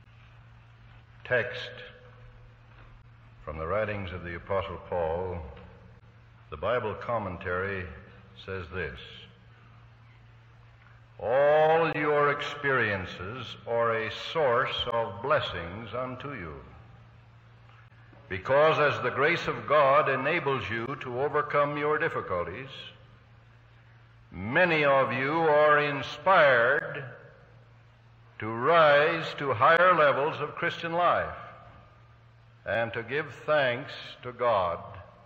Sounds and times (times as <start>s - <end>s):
Narration, monologue: 0.0s - 35.2s
Male speech, man speaking: 1.2s - 2.1s, 3.4s - 5.7s, 6.5s - 9.4s, 11.2s - 16.8s, 18.3s - 23.0s, 24.4s - 27.2s, 28.4s - 31.6s, 32.7s - 35.1s.